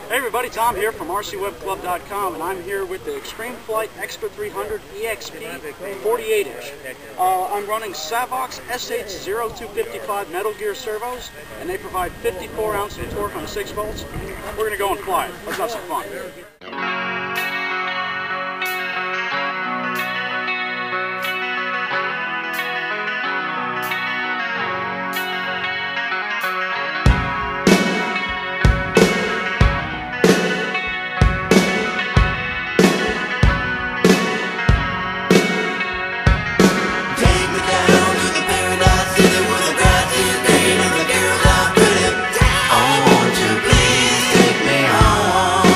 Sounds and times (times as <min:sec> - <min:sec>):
Speech: 0:00.0 - 0:16.7.